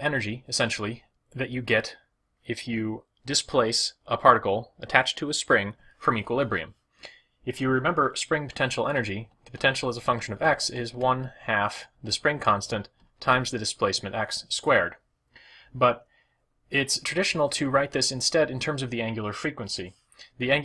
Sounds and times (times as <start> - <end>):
Speech: 0.0 - 6.8, 7.4 - 15.0, 15.7 - 16.0, 16.7 - 20.6.